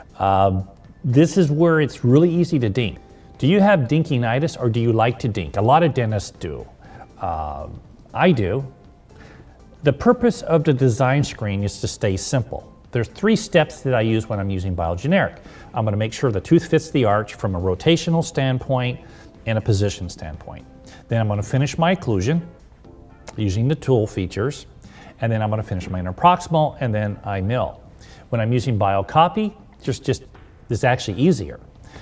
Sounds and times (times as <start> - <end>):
Music: 0.0 - 32.0
Speech: 0.2 - 8.7, 9.8 - 22.5, 23.3 - 31.6.